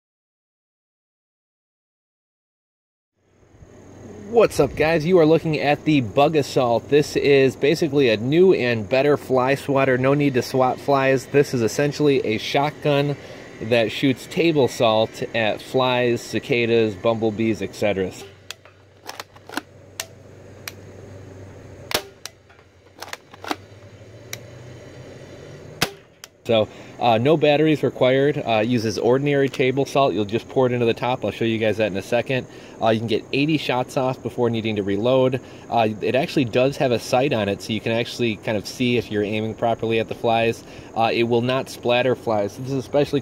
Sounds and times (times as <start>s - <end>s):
Speech: 4.2s - 18.3s, 26.5s - 43.2s.